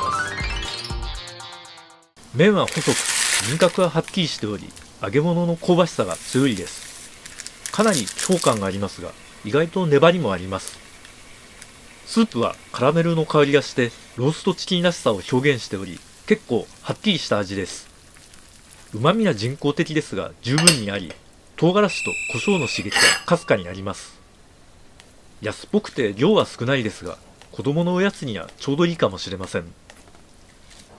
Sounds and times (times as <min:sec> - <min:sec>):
Speech: 0:02.3 - 0:06.9, 0:07.7 - 0:10.8, 0:12.1 - 0:17.9, 0:18.9 - 0:24.2, 0:25.4 - 0:29.8.